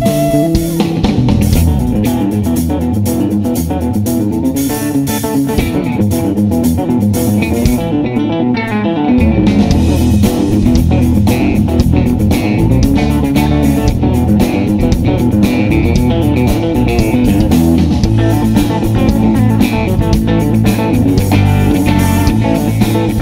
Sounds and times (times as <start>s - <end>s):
Strum: 0.0s - 23.2s.